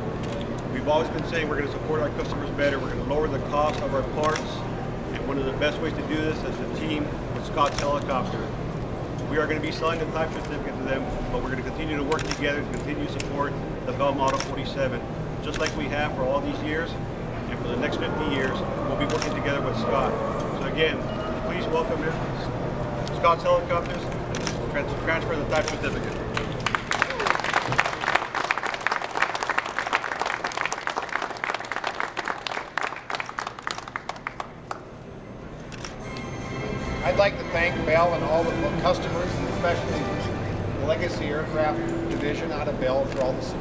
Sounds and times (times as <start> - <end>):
Speech: 9.3 - 22.5, 24.7 - 26.2.